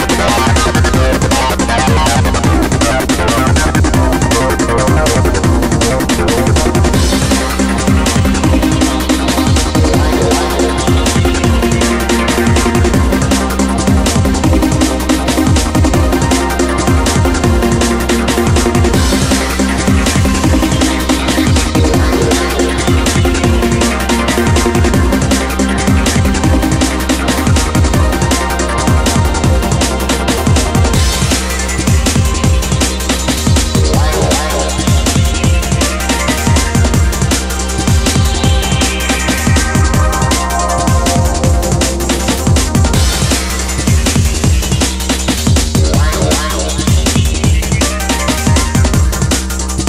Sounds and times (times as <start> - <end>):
Theme music: 0.0 - 49.8.